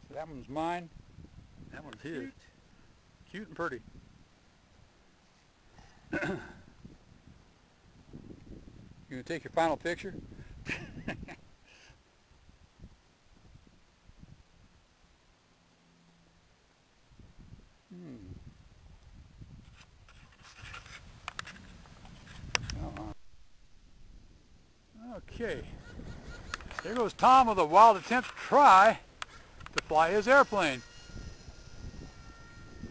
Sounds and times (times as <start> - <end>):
Rustling leaves: 2.3 - 9.1, 11.3 - 32.9
Speech: 9.1 - 10.2, 26.8 - 29.0, 29.8 - 30.8.